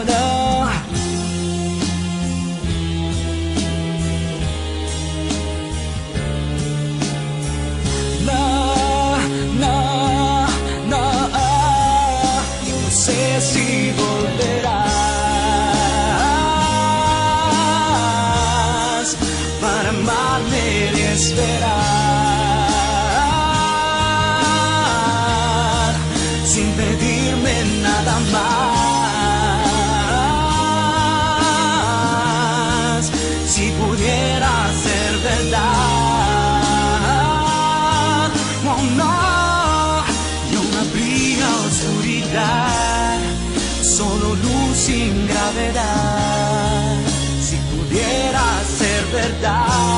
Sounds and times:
Music: 0.0s - 49.9s.

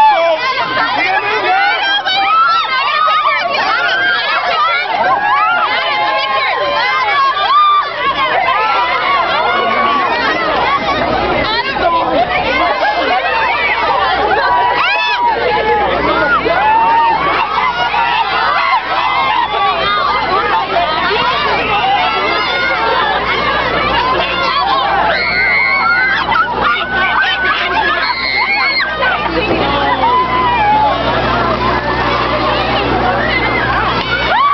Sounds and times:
Speech: 0.0s - 34.5s.

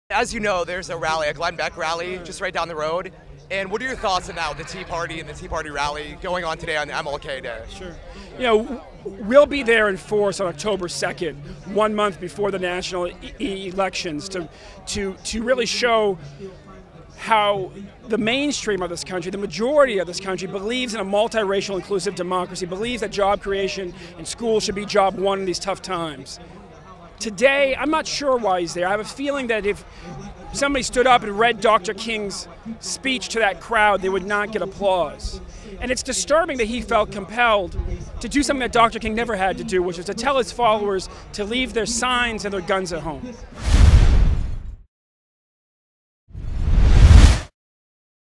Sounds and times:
Male speech, man speaking: 0.1s - 43.5s
Narration, monologue: 0.1s - 43.7s.

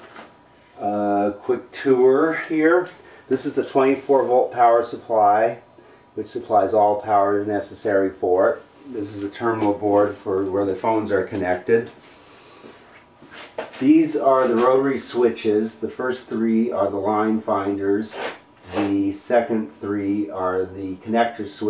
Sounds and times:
Speech: 0.8s - 12.0s, 13.8s - 21.6s.

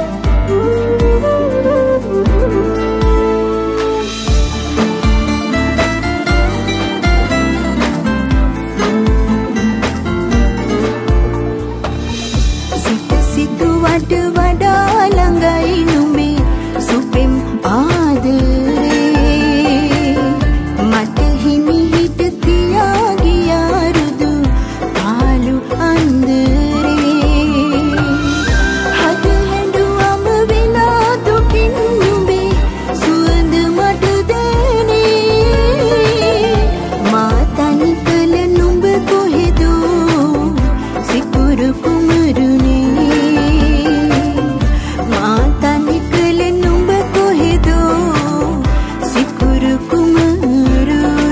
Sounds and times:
Music: 0.0s - 51.3s.

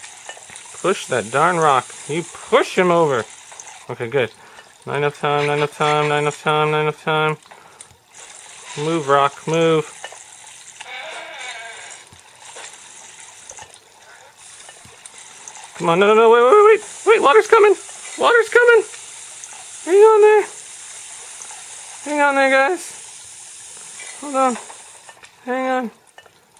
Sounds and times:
Speech: 0.8s - 3.3s, 3.9s - 4.3s, 4.9s - 7.4s, 8.8s - 9.9s, 15.8s - 18.9s, 19.8s - 20.6s, 22.0s - 23.0s, 24.2s - 24.6s, 25.4s - 26.0s.

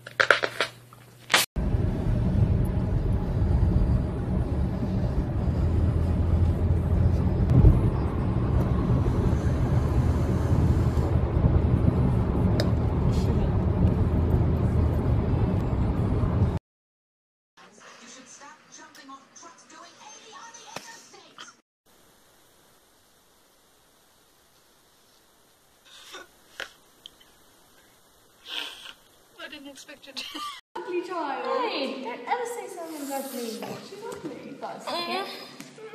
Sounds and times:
Snort: 28.4s - 29.0s.

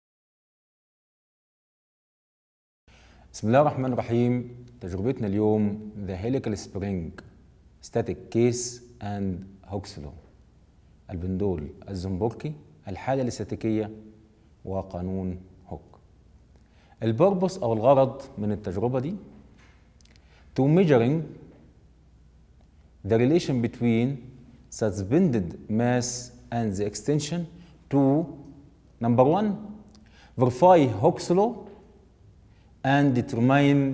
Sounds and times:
Speech: 3.3s - 10.3s, 11.1s - 14.0s, 14.6s - 16.0s, 17.0s - 19.4s, 20.6s - 21.5s, 23.0s - 31.8s, 32.8s - 33.9s.

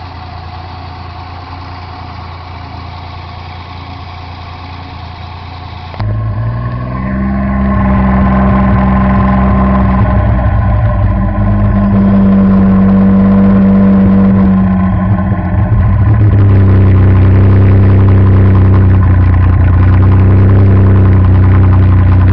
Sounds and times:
Car: 0.0s - 22.3s
Accelerating, revving, vroom: 6.0s - 19.0s, 19.7s - 22.3s.

